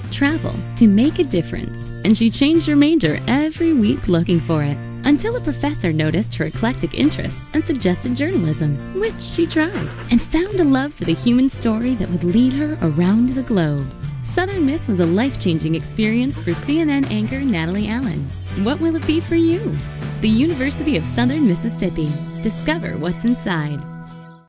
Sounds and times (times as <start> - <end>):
Music: 0.0 - 24.4
Speech: 0.1 - 23.8.